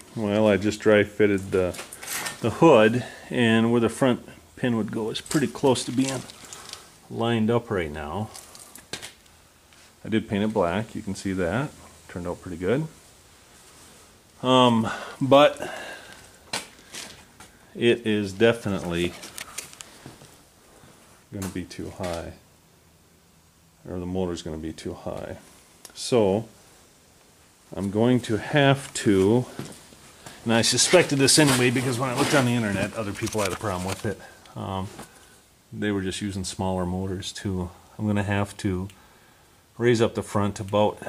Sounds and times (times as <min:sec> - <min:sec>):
Speech: 0:00.1 - 0:01.8, 0:02.4 - 0:06.3, 0:07.1 - 0:08.4, 0:10.0 - 0:13.0, 0:14.4 - 0:15.7, 0:17.8 - 0:19.2, 0:21.3 - 0:22.4, 0:23.8 - 0:26.6, 0:27.7 - 0:29.6, 0:30.4 - 0:35.1, 0:35.7 - 0:39.0, 0:39.8 - 0:41.0.